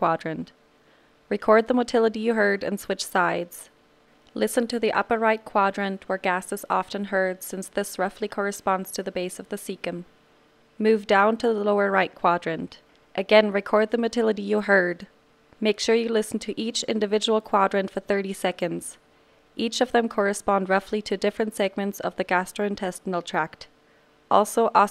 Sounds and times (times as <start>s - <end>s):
Speech: 0.0s - 0.6s, 1.3s - 3.8s, 4.4s - 10.1s, 10.8s - 19.0s, 19.6s - 23.7s, 24.3s - 24.9s.